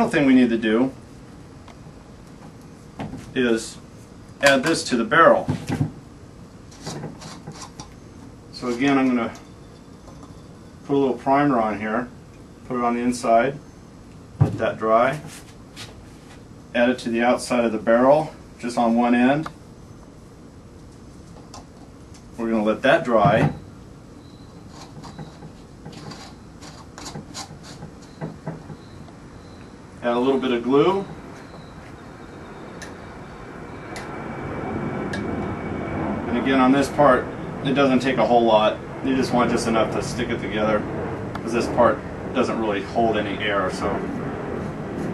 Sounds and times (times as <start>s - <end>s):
Speech: 0.0s - 1.0s, 3.4s - 3.8s, 4.4s - 5.6s, 8.6s - 9.4s, 10.9s - 12.1s, 12.7s - 13.6s, 14.5s - 15.3s, 16.8s - 19.6s, 22.4s - 23.6s, 30.0s - 31.2s, 36.3s - 44.1s.